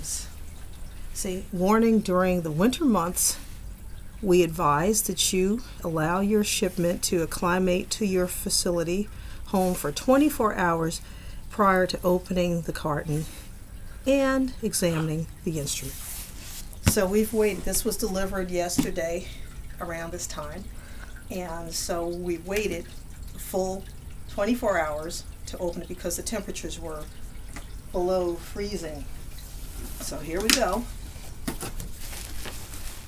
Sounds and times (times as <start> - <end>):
Speech: 1.2 - 3.4, 4.2 - 11.0, 14.1 - 16.0, 16.9 - 20.7, 21.3 - 27.1, 28.0 - 29.1, 30.0 - 30.9.